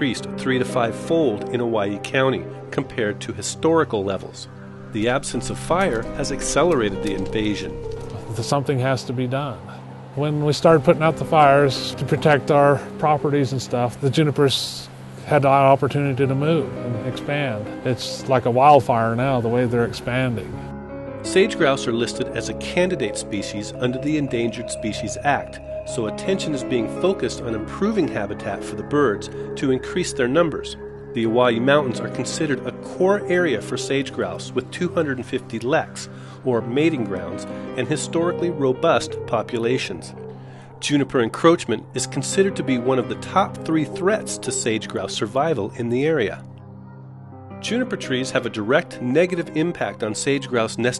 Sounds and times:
Speech: 0.0 - 20.5, 21.3 - 40.2, 40.8 - 46.4, 47.6 - 50.9
Music: 0.0 - 50.9.

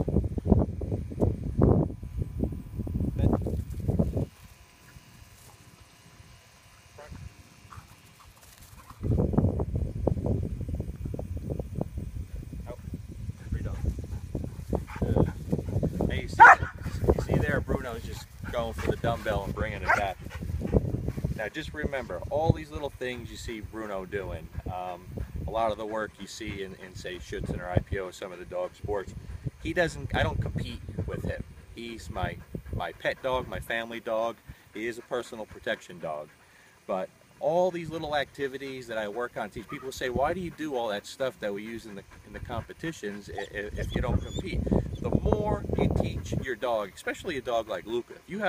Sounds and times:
Speech: 16.1 - 16.5, 17.2 - 20.2, 21.4 - 36.3, 36.9 - 48.4.

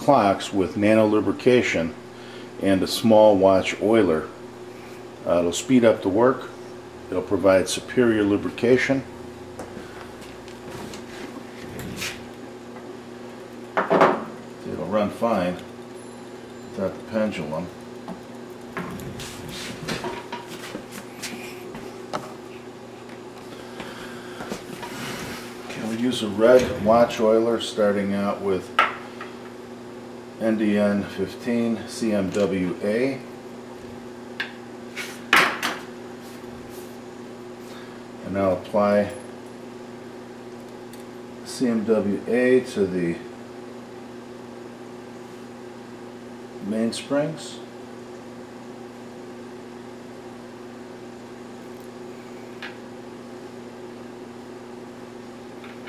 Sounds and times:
Speech: 0.0 - 2.0, 2.6 - 4.4, 5.2 - 6.5, 7.1 - 9.1, 14.6 - 15.7, 16.8 - 17.8, 25.7 - 28.7, 30.4 - 33.3, 38.2 - 39.2, 41.4 - 43.3, 46.6 - 47.7.

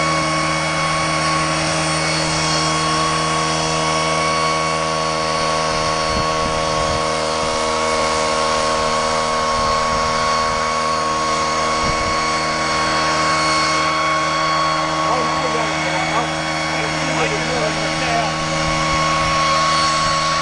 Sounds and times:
Boat, Water vehicle: 0.0 - 20.4.

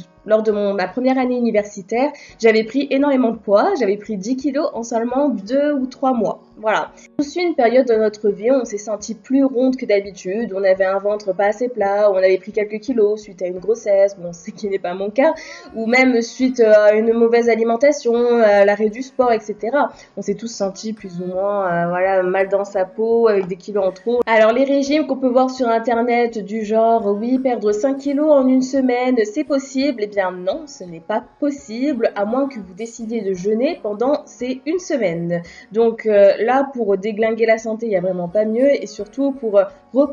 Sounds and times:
Speech: 0.0 - 40.1.

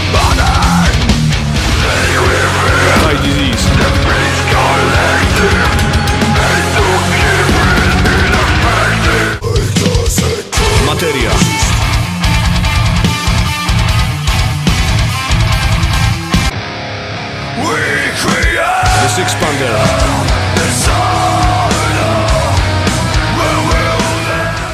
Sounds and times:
Music: 0.0 - 24.7
Speech: 0.1 - 1.0, 1.8 - 5.8, 9.4 - 11.9, 17.6 - 20.2.

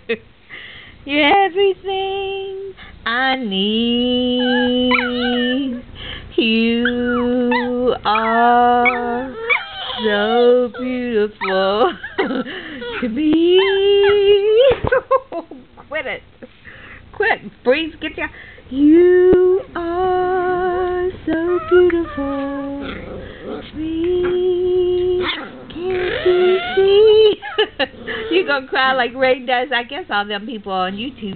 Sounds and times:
Female singing: 1.1 - 14.9, 18.7 - 27.5
Speech: 15.9 - 16.2, 17.2 - 18.4, 25.8 - 27.4, 28.3 - 31.3.

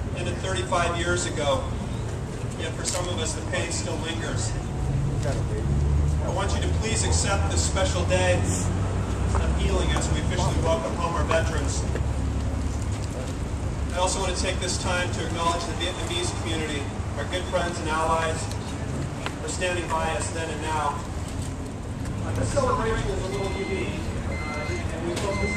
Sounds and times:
Speech: 9.4 - 11.9, 22.2 - 25.5.

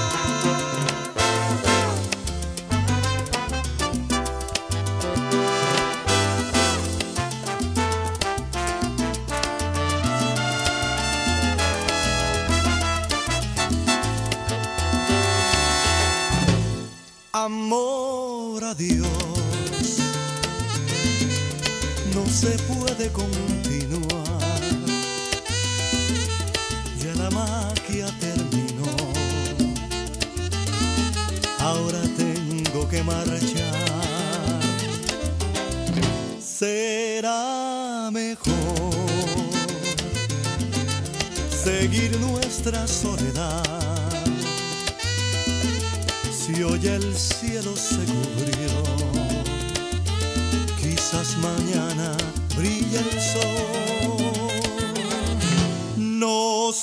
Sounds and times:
Jazz: 0.0 - 17.3, 18.9 - 36.5, 38.4 - 56.1
Saxophone: 0.0 - 17.3, 19.6 - 22.2, 24.4 - 27.3, 28.8 - 32.3, 33.6 - 36.4, 39.0 - 42.3, 44.1 - 56.1
Song: 0.0 - 17.7, 28.7 - 36.6, 38.5 - 56.2
Salsa music: 0.0 - 37.3, 38.1 - 56.8
Soundtrack music: 11.5 - 17.3.

